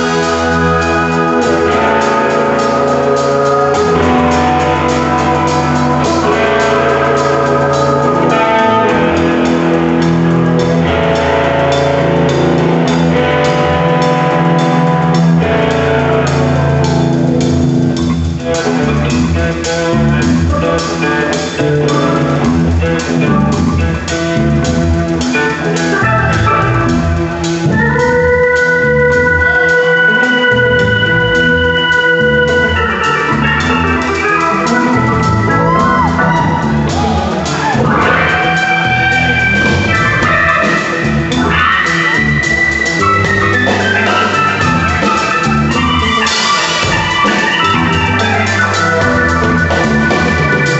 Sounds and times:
Music: 0.0s - 50.7s.

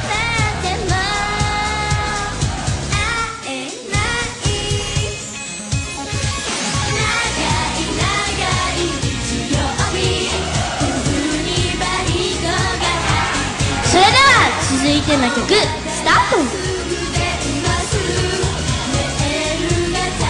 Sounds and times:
Singing: 0.0s - 5.3s, 6.9s - 20.2s
Pop music: 0.0s - 20.2s.

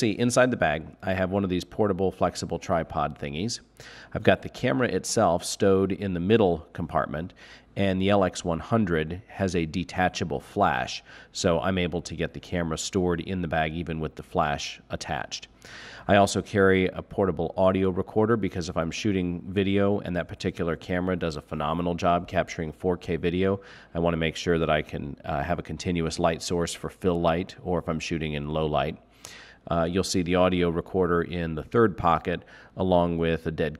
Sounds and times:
Speech: 0.0s - 29.0s, 29.6s - 33.7s.

